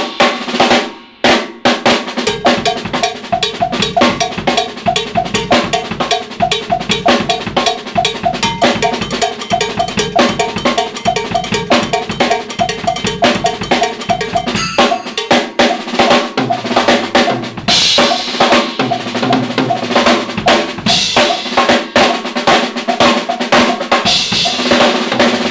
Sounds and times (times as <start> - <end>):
Music: 0.0 - 25.5.